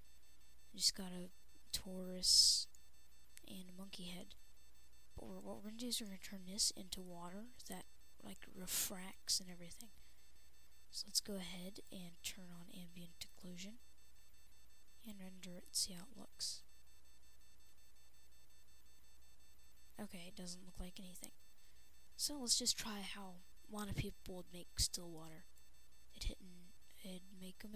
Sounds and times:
Speech: 0:00.8 - 0:02.7, 0:03.4 - 0:04.3, 0:05.2 - 0:09.9, 0:11.0 - 0:13.8, 0:15.0 - 0:16.6, 0:20.0 - 0:21.3, 0:22.2 - 0:25.4, 0:26.2 - 0:27.7.

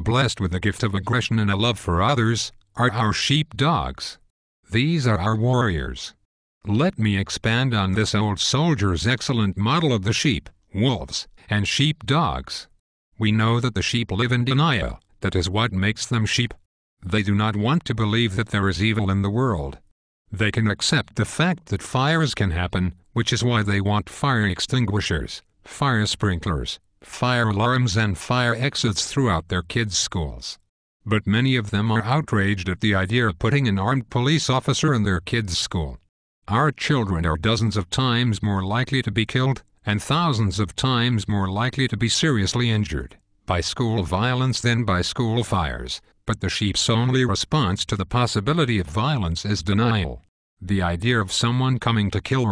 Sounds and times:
Speech: 0:00.0 - 0:52.5.

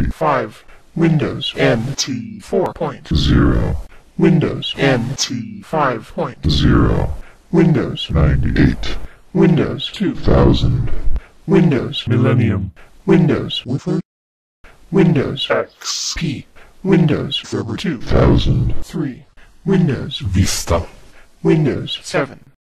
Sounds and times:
Male speech, man speaking: 0:00.0 - 0:14.1, 0:14.9 - 0:22.6
Narration, monologue: 0:00.0 - 0:14.1, 0:14.7 - 0:22.6
Speech synthesizer: 0:00.0 - 0:14.1, 0:15.0 - 0:22.6.

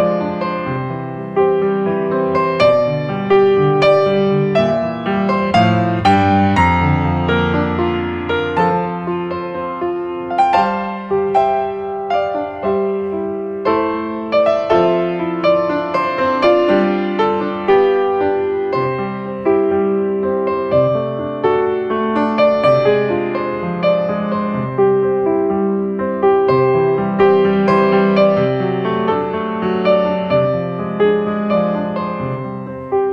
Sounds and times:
Music: 0:00.0 - 0:33.1.

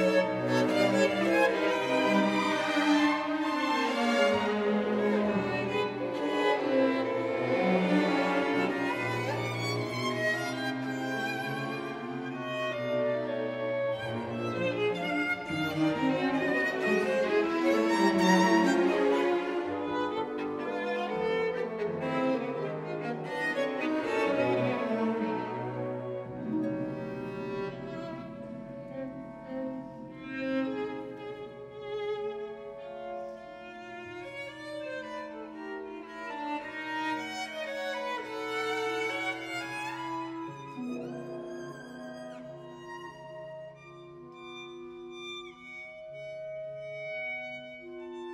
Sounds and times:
Violin, fiddle: 0:00.0 - 0:48.3.

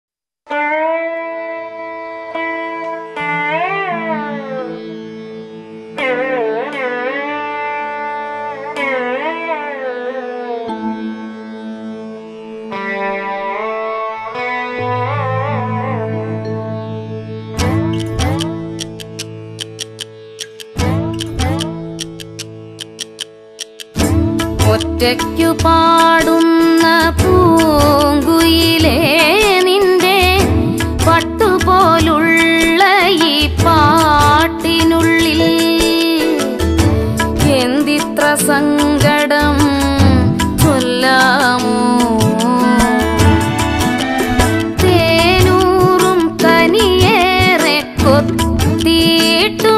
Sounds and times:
Music: 0:00.5 - 0:49.7.

